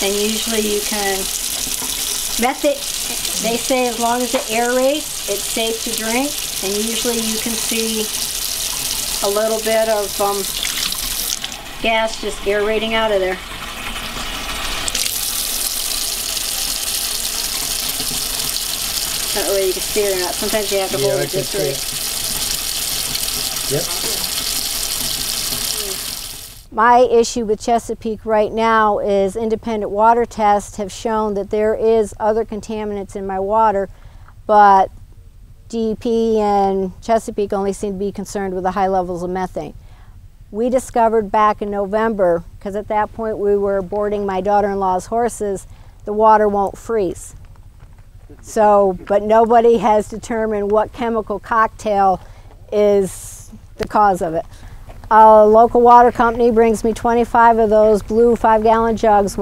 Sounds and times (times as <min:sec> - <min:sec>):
Sink (filling or washing): 0:00.0 - 0:26.7
Water: 0:00.0 - 0:26.7
Water tap, faucet: 0:00.0 - 0:26.7.